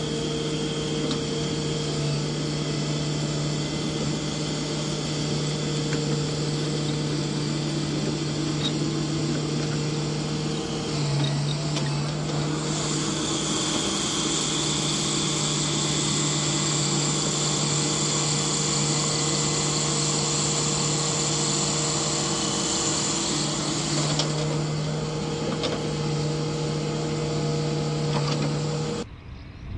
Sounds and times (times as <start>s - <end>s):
Vehicle: 0.0s - 29.7s.